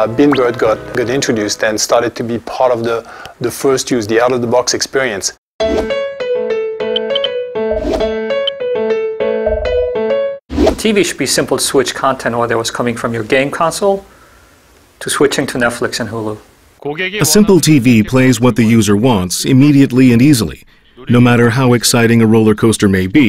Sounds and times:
Music: 0.0s - 2.3s, 5.6s - 10.4s
Speech: 0.0s - 5.4s, 10.8s - 14.1s, 15.0s - 23.2s.

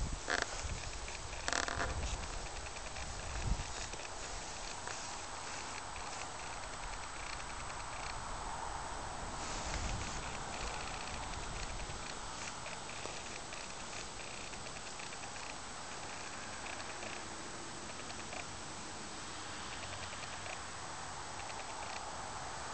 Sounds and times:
Outside, urban or manmade: 0.0s - 22.7s.

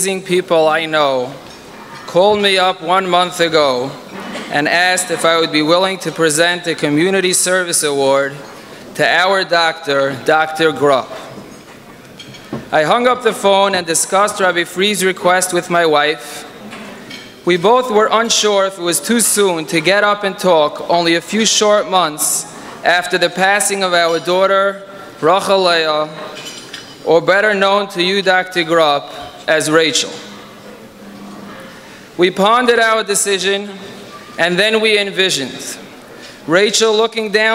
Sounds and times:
Speech: 0.0s - 1.4s, 2.1s - 8.4s, 9.0s - 11.3s, 12.7s - 16.5s, 17.4s - 26.2s, 27.0s - 30.3s, 32.2s - 35.8s, 36.5s - 37.5s.

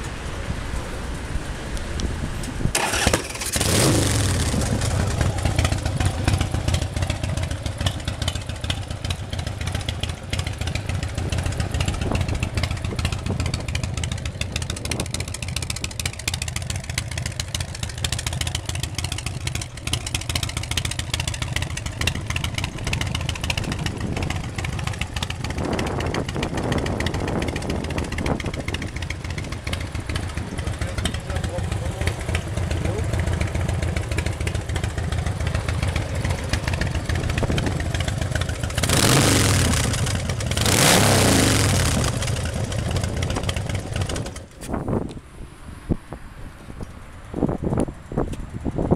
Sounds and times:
Motorcycle: 0.0s - 48.9s
Speech: 30.6s - 33.2s.

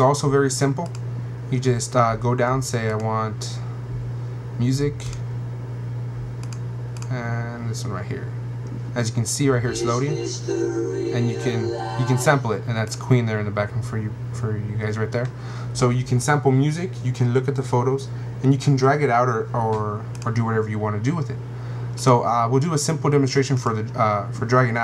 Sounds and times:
Speech: 0.0s - 3.7s, 4.6s - 5.2s, 7.1s - 8.4s, 9.0s - 21.4s, 22.0s - 24.8s
Inside, small room: 9.4s - 12.8s.

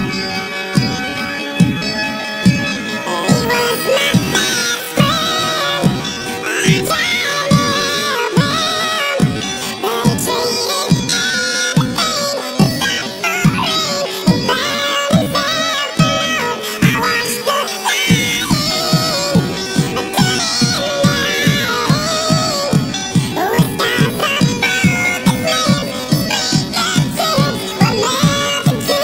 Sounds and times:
Music: 0.0s - 29.0s.

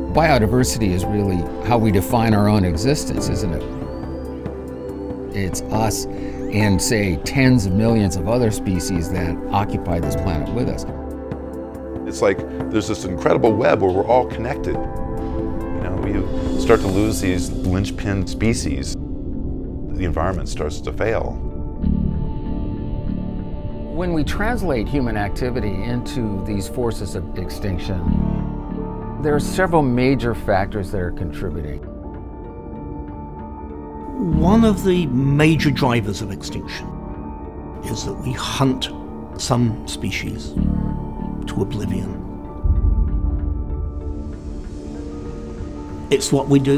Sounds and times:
Music: 0.0s - 46.7s
Speech: 0.1s - 3.7s, 5.4s - 10.9s, 12.1s - 14.8s, 15.8s - 19.0s, 19.9s - 21.4s, 24.0s - 28.2s, 29.2s - 31.8s, 34.2s - 37.0s, 37.8s - 40.6s, 41.4s - 42.2s, 46.1s - 46.7s.

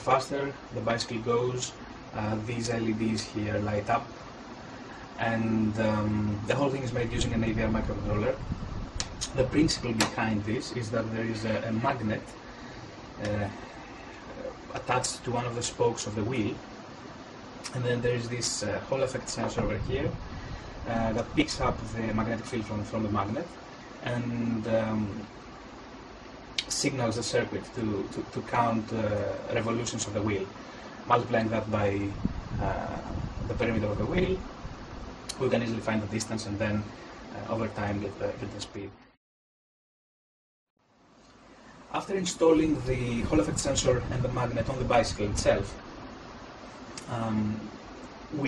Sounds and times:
Speech: 0.0s - 4.1s, 5.2s - 8.4s, 9.1s - 12.4s, 13.2s - 13.7s, 14.3s - 16.6s, 17.7s - 20.2s, 20.9s - 25.3s, 26.6s - 34.5s, 35.3s - 39.0s, 41.9s - 45.8s, 47.0s - 47.7s.

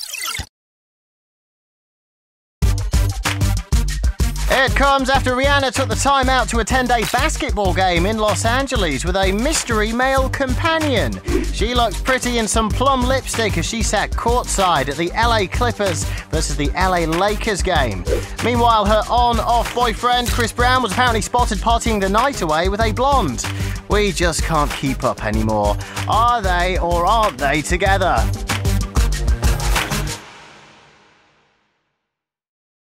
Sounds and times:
Music: 2.6s - 32.1s
Speech: 4.5s - 28.3s.

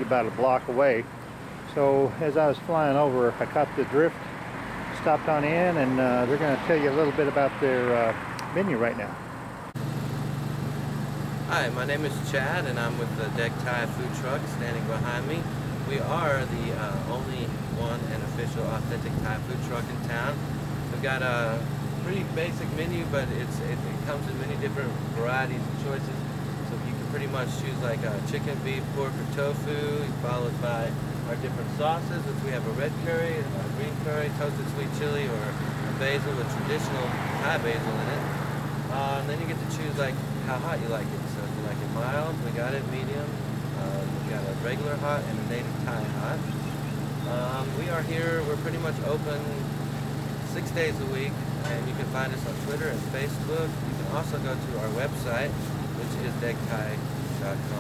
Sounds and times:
Speech: 0.0s - 1.1s, 1.7s - 4.2s, 5.0s - 9.2s, 11.5s - 38.3s, 38.9s - 46.6s, 47.2s - 49.7s, 50.5s - 57.8s
Vehicle: 0.0s - 57.8s.

